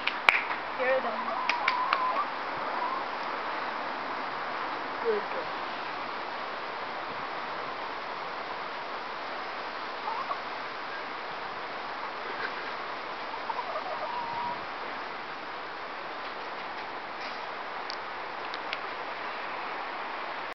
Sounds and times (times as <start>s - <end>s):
Cluck: 1.2s - 3.0s, 10.0s - 10.4s, 13.3s - 14.6s.